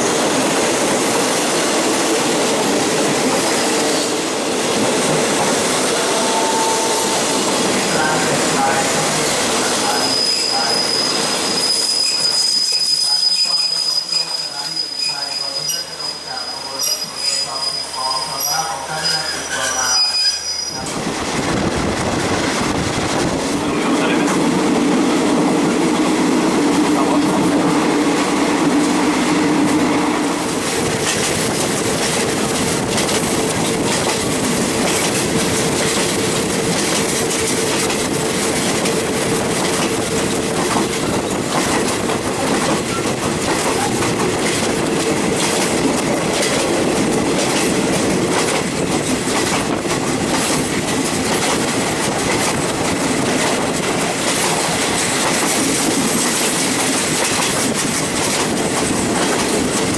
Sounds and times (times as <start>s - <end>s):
Speech: 7.8s - 10.8s, 13.0s - 20.2s, 23.6s - 24.4s.